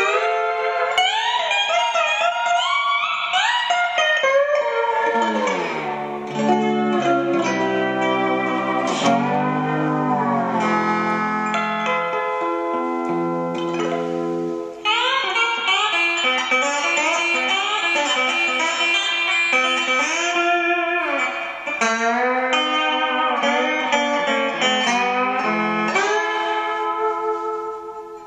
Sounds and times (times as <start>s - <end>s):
Strum: 0.0s - 28.2s.